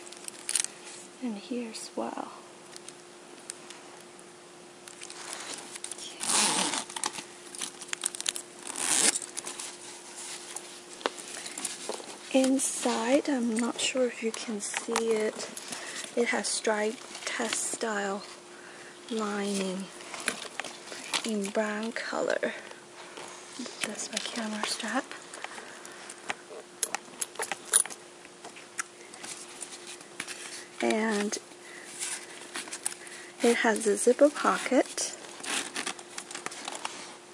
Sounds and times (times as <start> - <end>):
Speech: 1.2 - 2.4, 12.3 - 15.5, 16.2 - 18.3, 19.1 - 19.9, 21.3 - 22.7, 23.8 - 25.1, 30.8 - 31.4, 33.4 - 35.2.